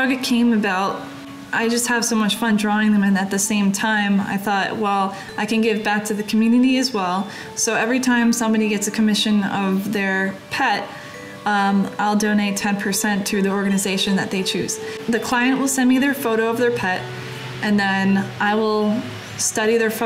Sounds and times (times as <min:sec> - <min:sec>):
Speech: 0:00.0 - 0:10.9, 0:11.5 - 0:20.0
Music: 0:00.0 - 0:20.0.